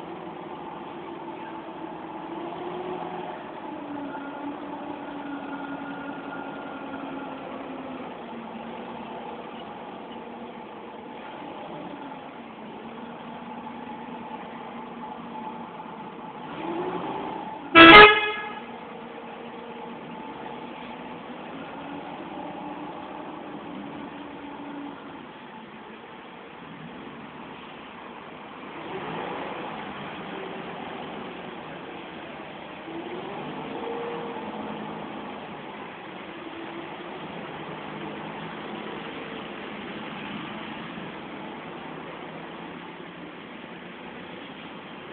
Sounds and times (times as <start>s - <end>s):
Bus: 0.0s - 45.1s.